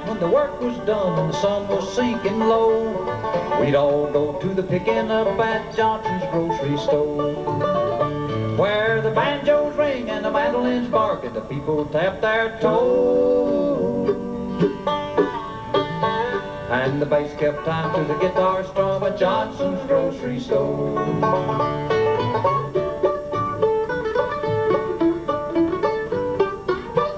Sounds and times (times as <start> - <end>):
Musical instrument: 12.6 - 27.1.